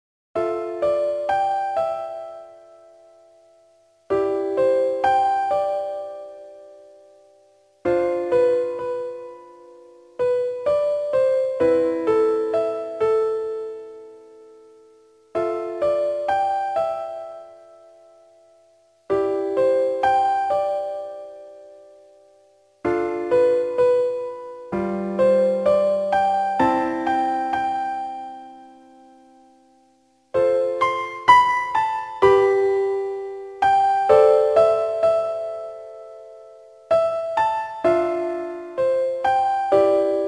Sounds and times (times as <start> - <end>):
Tender music: 0.4 - 40.2.